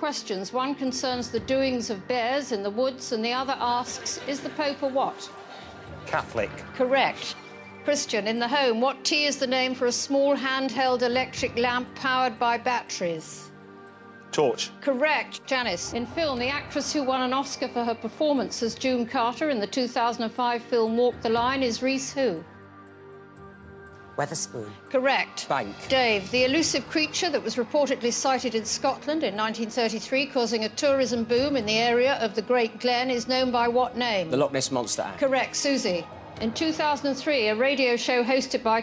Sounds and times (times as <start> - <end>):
Music: 0.0 - 38.8.